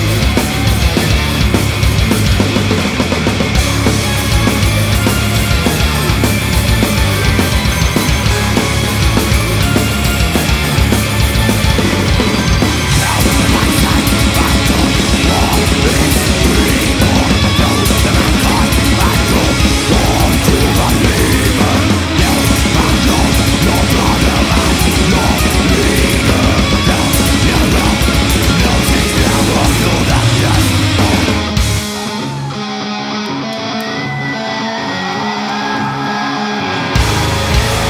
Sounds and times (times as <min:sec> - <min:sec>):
Music: 0:00.0 - 0:37.9.